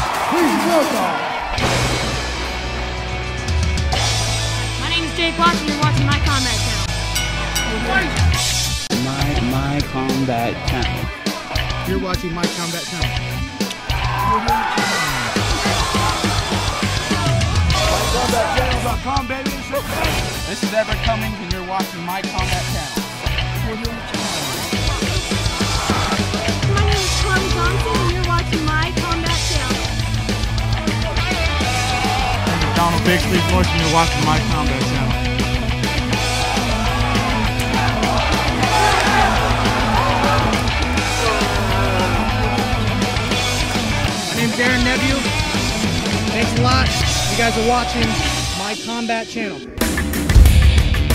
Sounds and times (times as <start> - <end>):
Music: 0.0 - 51.1
Speech: 32.6 - 35.2.